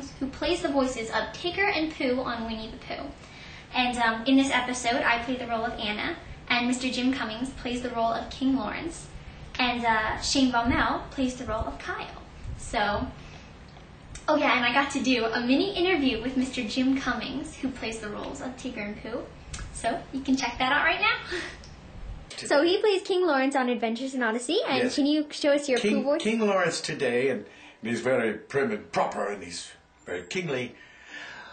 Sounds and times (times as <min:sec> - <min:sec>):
Speech: 0:22.3 - 0:30.8.